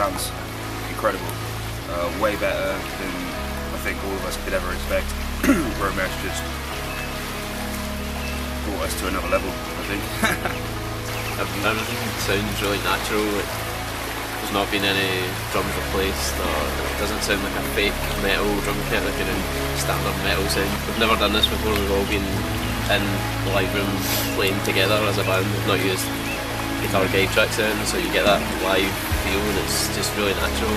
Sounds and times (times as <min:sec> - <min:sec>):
Speech: 0:00.0 - 0:06.5, 0:08.7 - 0:10.5, 0:11.4 - 0:13.5, 0:14.4 - 0:26.1, 0:26.8 - 0:30.7
Music: 0:00.0 - 0:30.7.